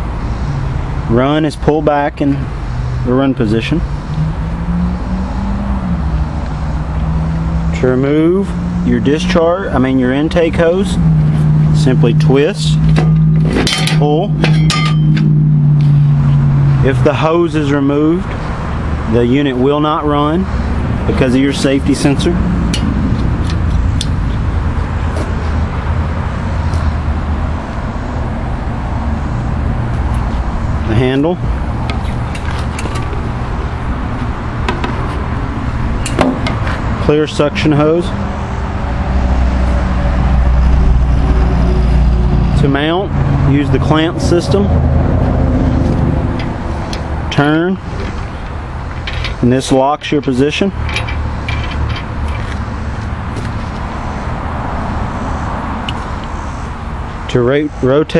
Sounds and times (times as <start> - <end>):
Speech: 1.1 - 3.8, 7.8 - 11.0, 11.8 - 12.8, 13.9 - 14.4, 16.8 - 18.3, 19.1 - 20.5, 21.1 - 22.4, 30.8 - 31.4, 37.0 - 38.2, 42.5 - 44.7, 47.3 - 47.8, 49.4 - 50.8, 57.3 - 58.1.